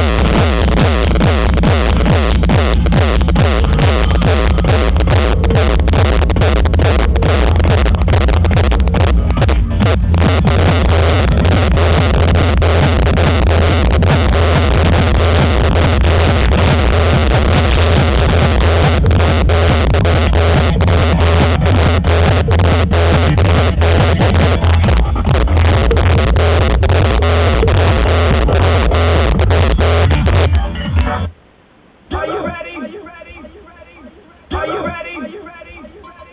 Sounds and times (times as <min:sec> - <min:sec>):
Music: 0:00.0 - 0:31.4.